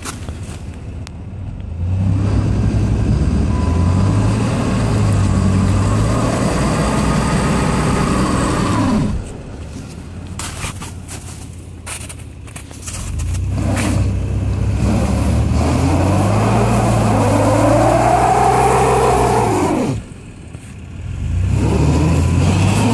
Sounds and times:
Car: 0:00.0 - 0:22.9.

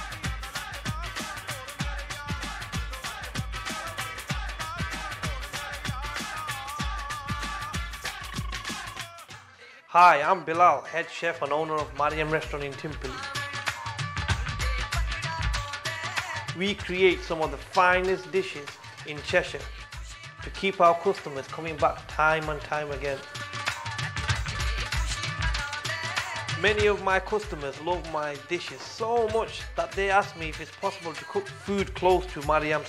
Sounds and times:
Music: 0:00.0 - 0:32.8
Speech: 0:09.9 - 0:13.2, 0:16.6 - 0:19.7, 0:20.4 - 0:23.3, 0:26.6 - 0:32.8.

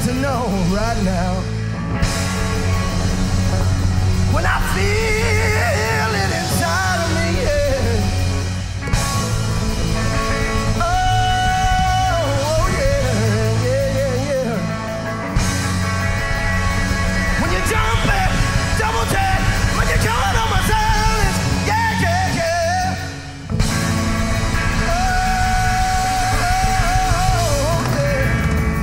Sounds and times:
Rhythm and blues: 0:00.0 - 0:28.8
Middle Eastern music: 0:02.1 - 0:28.8.

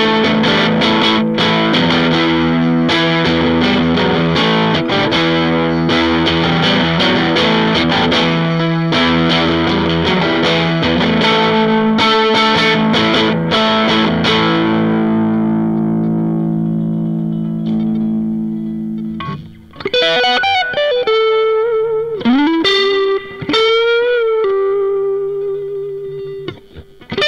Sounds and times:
Effects unit: 0:00.0 - 0:27.2
Guitar: 0:00.0 - 0:27.2.

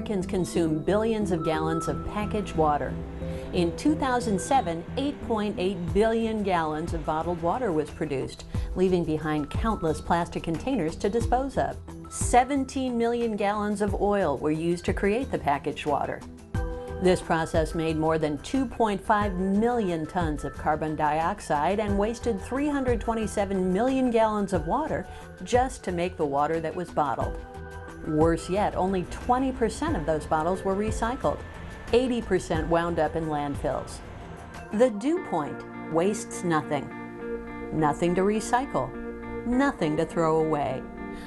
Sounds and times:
Speech: 0:00.0 - 0:03.0, 0:03.6 - 0:16.2, 0:17.0 - 0:27.3, 0:28.1 - 0:31.4, 0:32.0 - 0:34.0, 0:34.7 - 0:36.9, 0:37.8 - 0:38.9, 0:39.5 - 0:40.8
Music: 0:00.0 - 0:41.2.

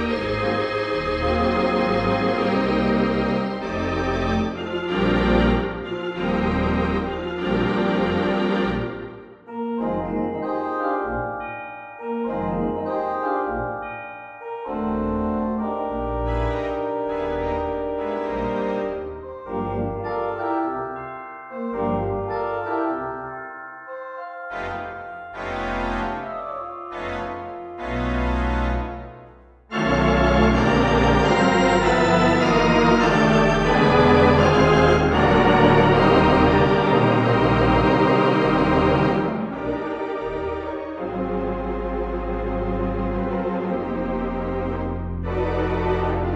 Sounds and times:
Electronic organ: 0:00.0 - 0:46.3.

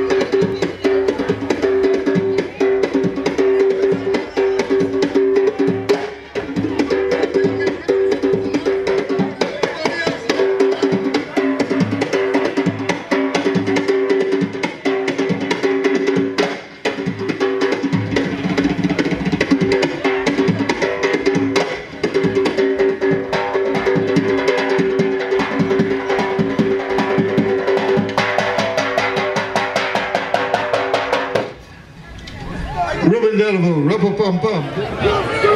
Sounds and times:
Music: 0:00.0 - 0:31.6
Speech: 0:06.7 - 0:11.6, 0:32.0 - 0:35.5.

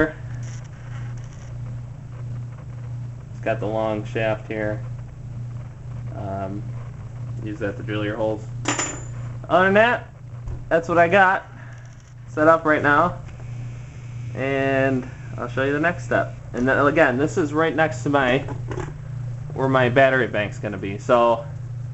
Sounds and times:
Speech: 0:03.4 - 0:04.8, 0:06.1 - 0:06.7, 0:07.4 - 0:08.5, 0:09.5 - 0:10.1, 0:10.7 - 0:11.5, 0:12.3 - 0:13.2, 0:14.4 - 0:18.5, 0:19.6 - 0:21.5.

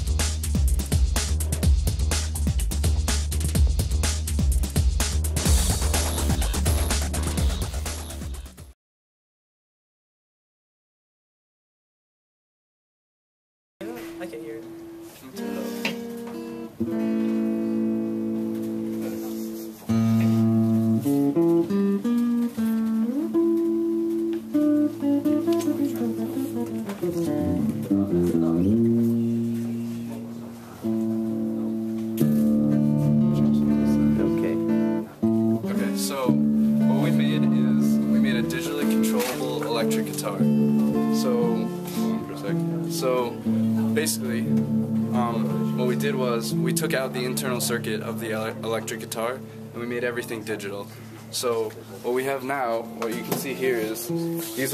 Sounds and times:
Electric guitar: 0:13.8 - 0:51.8.

